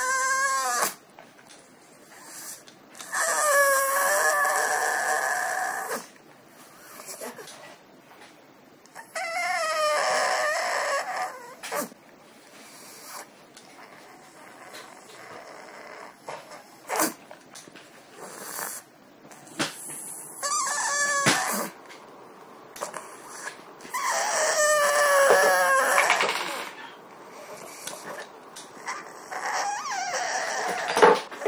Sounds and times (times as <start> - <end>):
Dog: 0.0 - 1.0, 1.9 - 7.8, 8.9 - 12.0, 12.6 - 17.2, 18.1 - 21.8, 22.8 - 31.4.